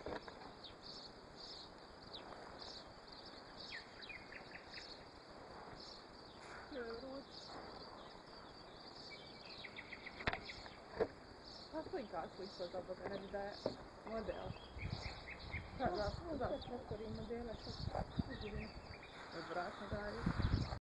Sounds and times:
Outside, rural or natural: 0.0s - 20.8s
Speech: 6.7s - 7.3s, 11.7s - 14.6s, 15.8s - 20.4s.

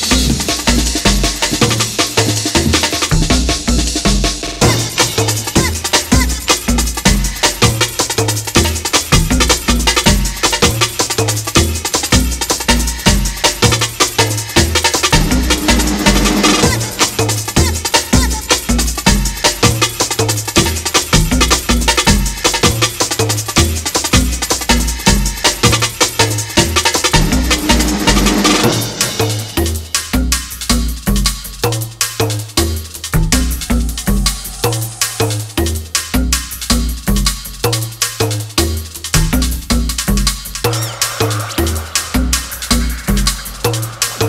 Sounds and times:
Drum roll: 0.0s - 37.8s, 38.6s - 44.2s.

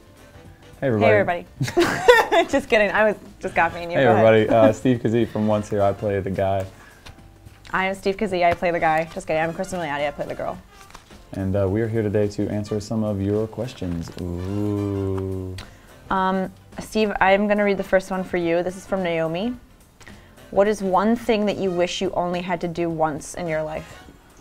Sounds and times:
Music: 0.0s - 24.4s.

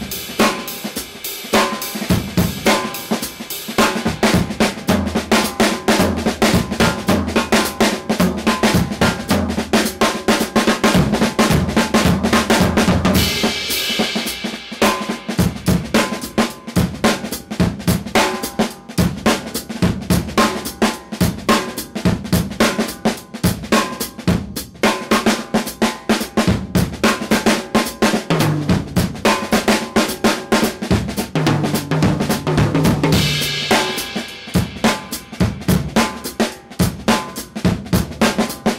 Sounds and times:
Bass drum: 0.0s - 1.0s, 1.6s - 24.9s, 26.4s - 27.4s, 28.2s - 38.7s
Drum kit: 0.0s - 38.7s
Snare drum: 0.0s - 38.7s.

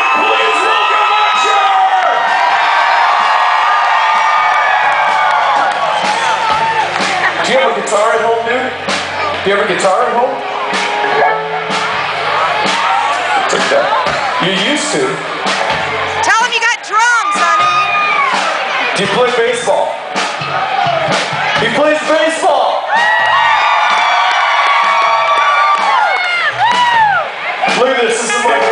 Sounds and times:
Musical instrument: 6.1s - 16.8s.

